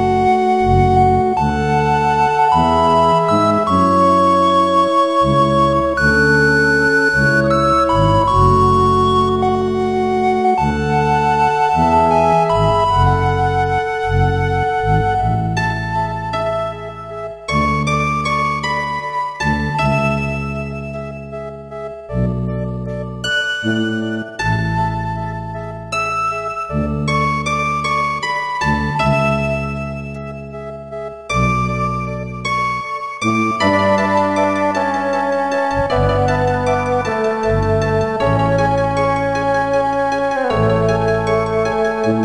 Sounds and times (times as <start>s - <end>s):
Music: 0.0s - 42.2s.